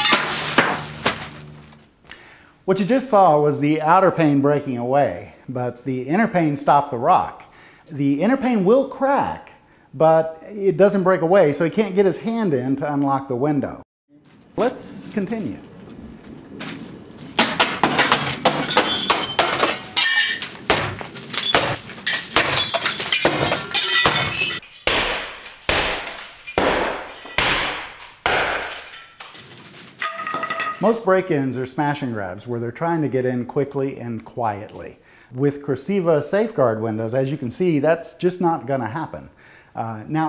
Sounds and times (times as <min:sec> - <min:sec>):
Speech: 0:02.7 - 0:13.8, 0:14.6 - 0:15.7, 0:30.8 - 0:40.2
Glass: 0:18.2 - 0:20.6, 0:21.4 - 0:24.9.